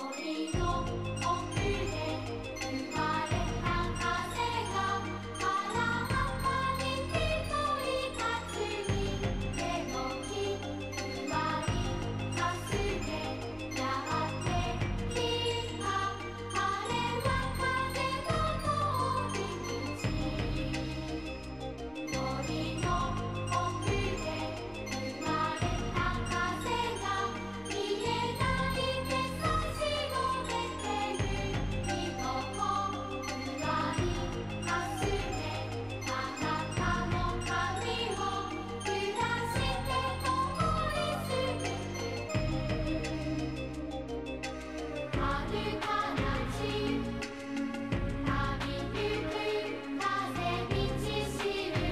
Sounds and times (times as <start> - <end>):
Music: 0.0 - 51.9.